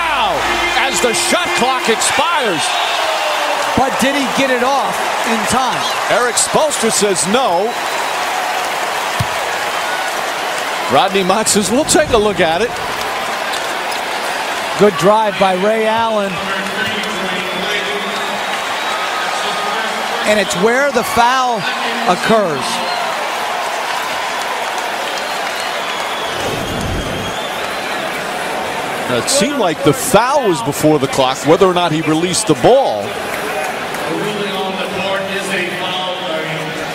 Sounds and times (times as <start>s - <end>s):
Speech: 0.0s - 2.7s, 3.8s - 7.7s, 10.9s - 12.7s, 14.8s - 18.4s, 19.3s - 22.9s, 29.1s - 36.9s.